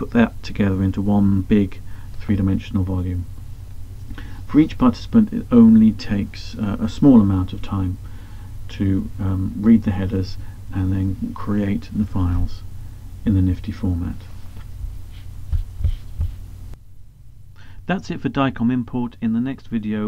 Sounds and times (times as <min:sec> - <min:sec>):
Speech: 0:00.0 - 0:03.3, 0:04.5 - 0:08.0, 0:08.7 - 0:14.3, 0:17.9 - 0:20.0
Heart murmur: 0:15.4 - 0:16.4.